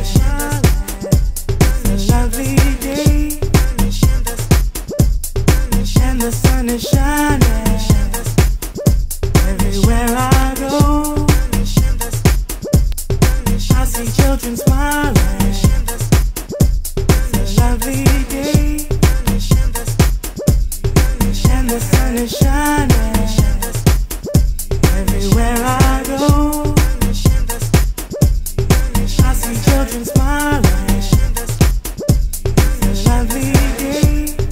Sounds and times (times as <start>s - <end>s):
Afrobeat: 0.0s - 34.5s.